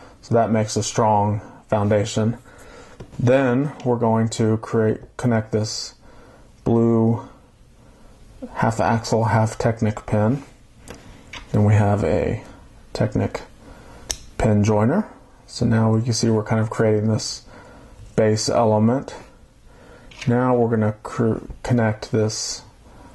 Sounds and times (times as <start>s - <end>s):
Inside, small room: 0.0s - 23.1s
Speech: 0.2s - 2.4s, 3.2s - 6.0s, 6.6s - 7.4s, 8.4s - 10.6s, 11.5s - 13.6s, 14.4s - 17.5s, 18.2s - 19.4s, 20.2s - 22.8s.